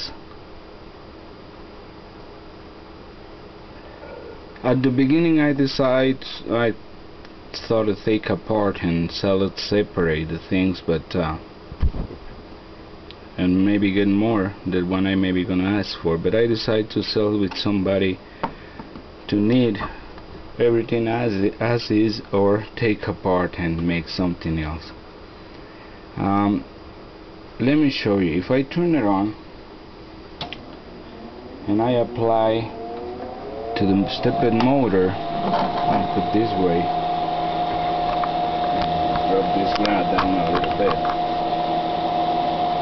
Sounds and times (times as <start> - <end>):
Speech: 0.0 - 0.2, 4.6 - 6.8, 7.6 - 11.5, 13.4 - 18.2, 19.3 - 20.0, 20.6 - 25.0, 26.2 - 26.7, 27.6 - 29.4, 31.6 - 32.8, 33.8 - 35.2, 35.8 - 37.0, 38.7 - 41.1.